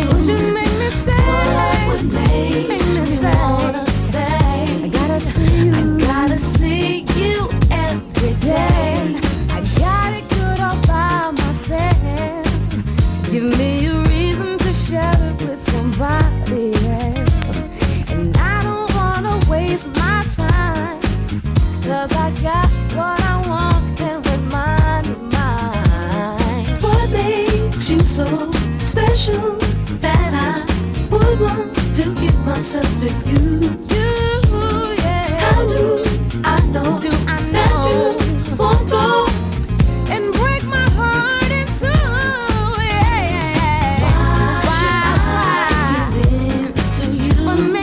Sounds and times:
Pop music: 0.0 - 47.8
Rhythm and blues: 0.0 - 47.8.

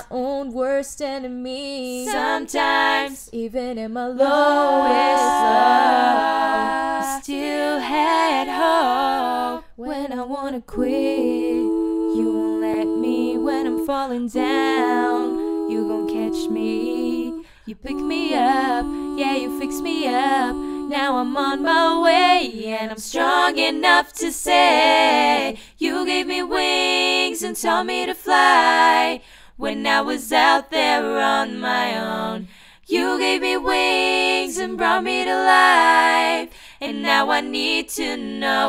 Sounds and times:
Singing: 0.0 - 38.6.

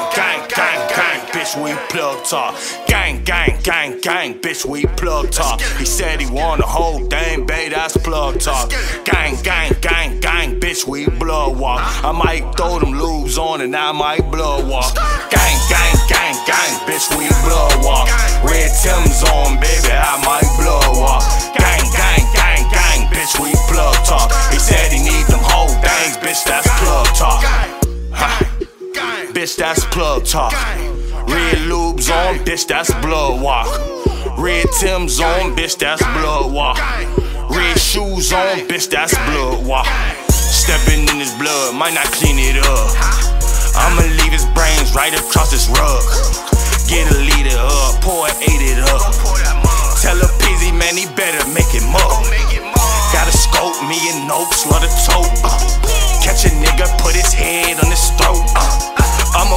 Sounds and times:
Music: 0.0 - 59.5.

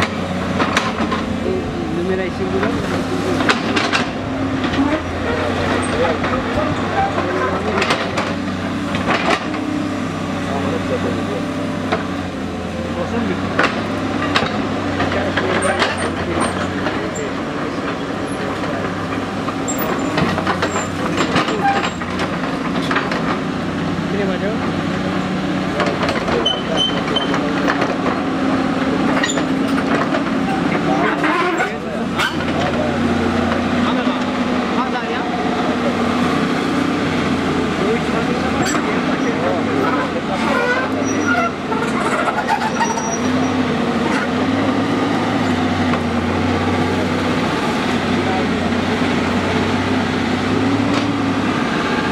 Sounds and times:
Speech: 1.4 - 3.5, 4.8 - 8.0, 10.4 - 11.7, 12.8 - 13.6, 14.9 - 19.2, 20.5 - 22.1, 24.0 - 29.3, 30.5 - 36.4, 37.6 - 44.9.

